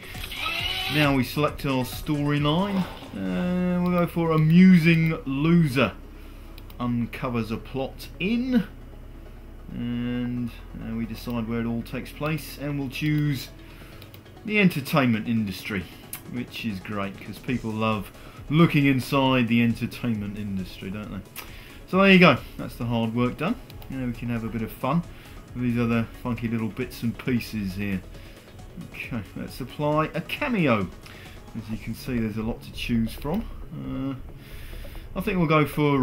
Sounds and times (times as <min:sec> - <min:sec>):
Music: 0:00.0 - 0:36.0
Speech: 0:00.9 - 0:06.0, 0:06.8 - 0:08.7, 0:09.7 - 0:13.5, 0:14.5 - 0:21.2, 0:21.9 - 0:28.0, 0:28.8 - 0:30.9, 0:31.6 - 0:34.2, 0:35.2 - 0:36.0.